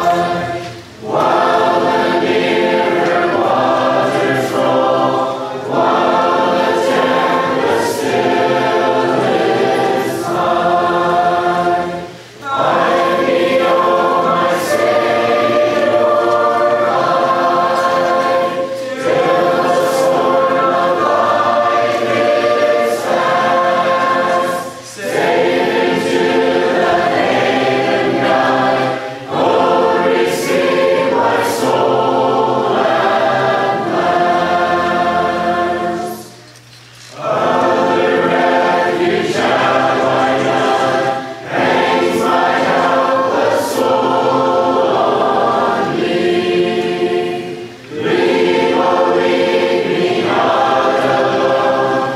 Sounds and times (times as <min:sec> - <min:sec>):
Choir: 0:00.0 - 0:52.1.